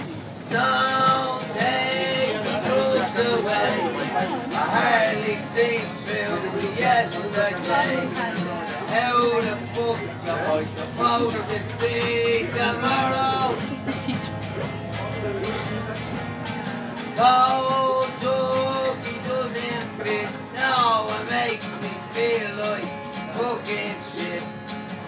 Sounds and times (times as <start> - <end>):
Music: 0.0 - 25.0
Male singing: 0.5 - 13.9, 17.2 - 24.6
Speech: 1.6 - 5.4, 6.0 - 13.3, 14.6 - 16.4.